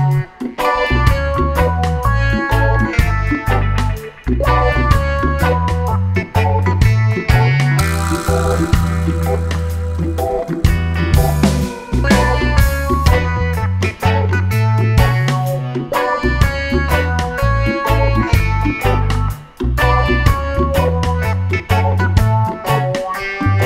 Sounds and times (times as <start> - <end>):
Music: 0.0 - 23.6.